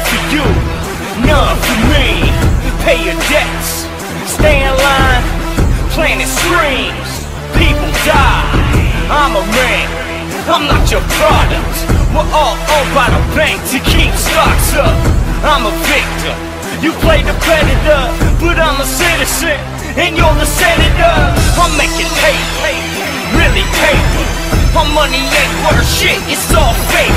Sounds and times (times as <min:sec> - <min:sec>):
Angry music: 0:00.0 - 0:27.1.